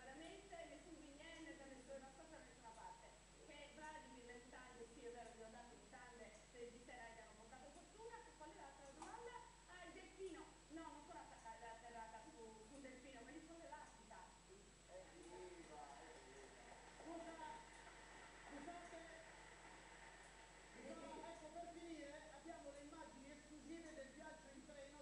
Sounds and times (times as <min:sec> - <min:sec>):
Speech: 0:00.0 - 0:17.7, 0:20.8 - 0:25.0.